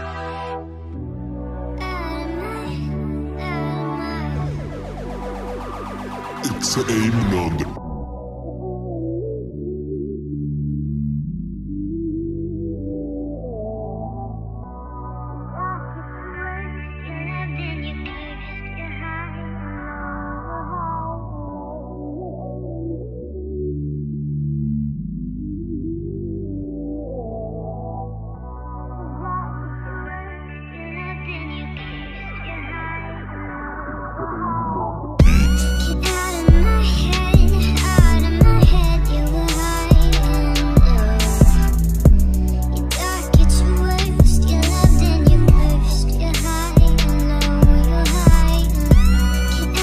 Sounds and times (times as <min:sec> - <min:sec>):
Music: 0:00.0 - 0:49.8.